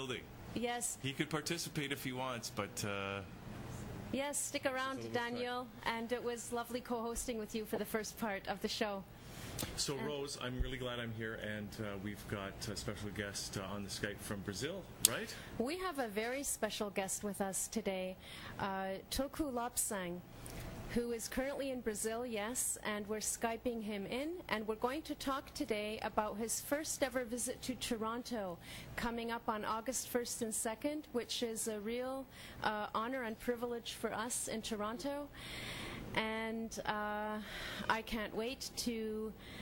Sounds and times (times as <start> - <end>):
Speech: 9.8 - 16.8.